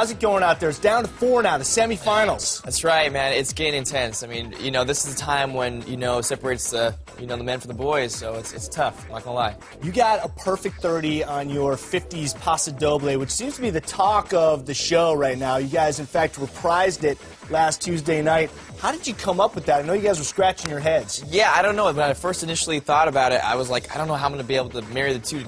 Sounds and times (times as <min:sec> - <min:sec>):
Music: 0:00.0 - 0:25.4
Speech: 0:00.0 - 0:25.4.